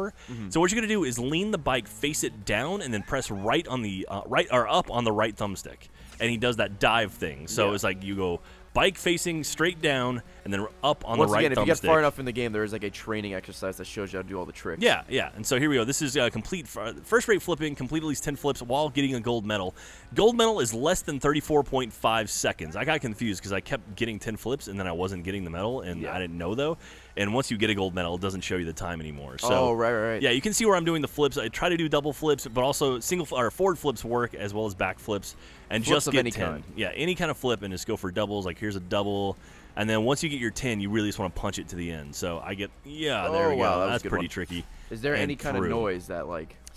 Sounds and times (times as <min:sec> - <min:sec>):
Speech: 0:00.0 - 0:46.6.